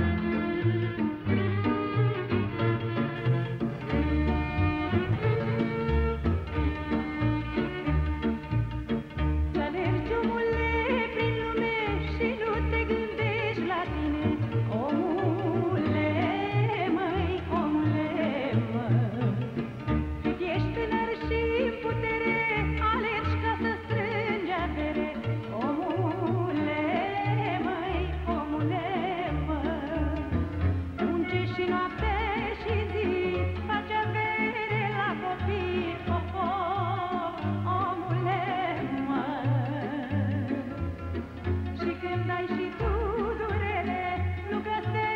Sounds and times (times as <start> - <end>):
Music: 0.0 - 45.1.